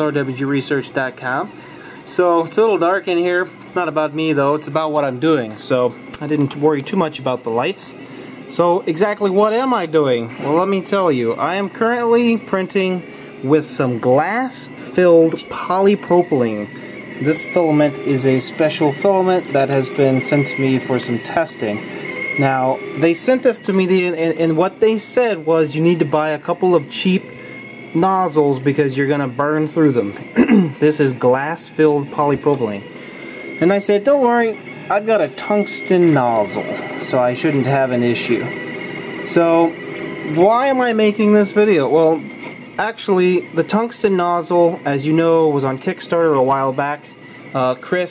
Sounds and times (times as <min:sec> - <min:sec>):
Speech: 0:00.0 - 0:01.5, 0:02.1 - 0:27.3, 0:27.9 - 0:32.9, 0:33.6 - 0:38.5, 0:39.3 - 0:48.1.